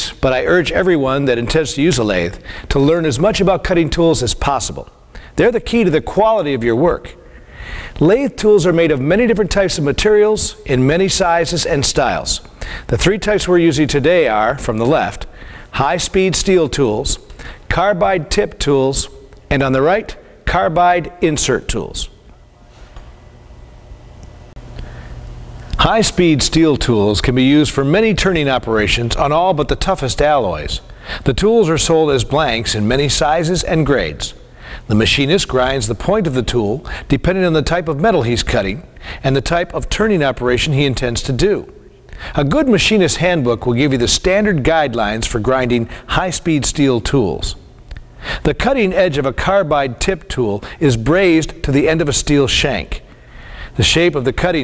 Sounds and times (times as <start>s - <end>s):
Speech: 0.0s - 7.2s, 8.0s - 22.2s, 25.8s - 41.8s, 42.4s - 47.6s, 48.4s - 53.1s, 53.8s - 54.6s.